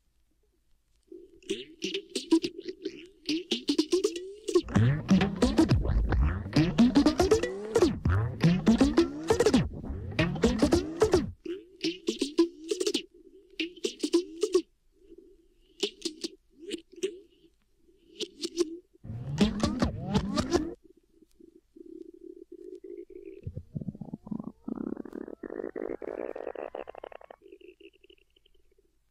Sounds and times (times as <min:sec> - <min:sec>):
Sound effect: 0:01.5 - 0:14.7, 0:18.2 - 0:20.8, 0:23.2 - 0:28.8.